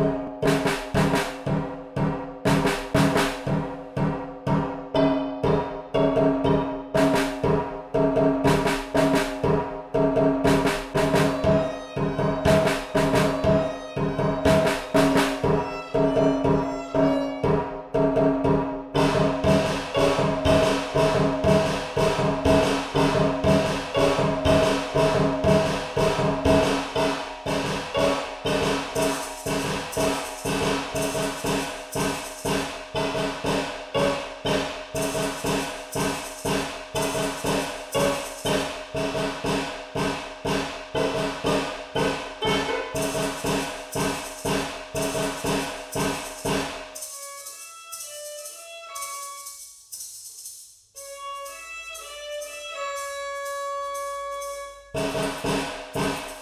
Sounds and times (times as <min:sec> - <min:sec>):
Soundtrack music: 0:00.0 - 0:17.7, 0:19.0 - 0:46.8.